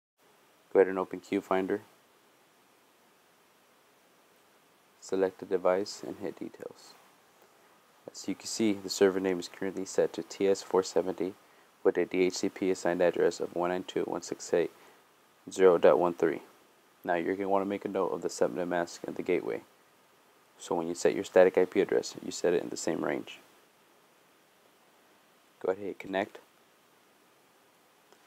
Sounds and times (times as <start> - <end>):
Speech: 0.7 - 1.9, 5.0 - 7.0, 8.1 - 14.7, 15.5 - 19.7, 20.6 - 23.4, 25.6 - 26.5.